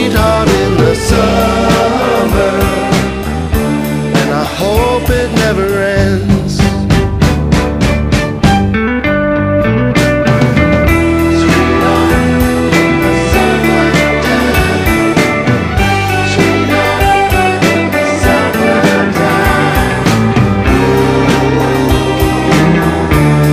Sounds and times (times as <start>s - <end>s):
Electric guitar: 0.0s - 23.5s.